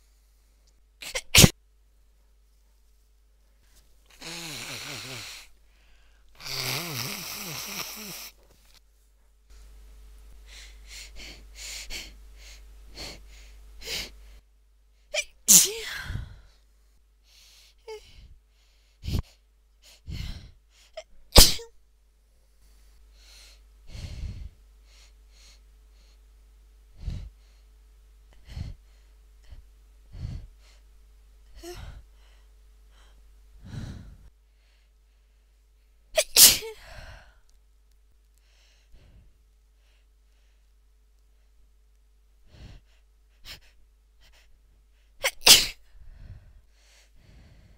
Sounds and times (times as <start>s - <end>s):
Sneeze: 1.0s - 1.6s, 15.2s - 16.0s, 21.3s - 21.8s, 36.2s - 36.8s, 45.2s - 45.8s.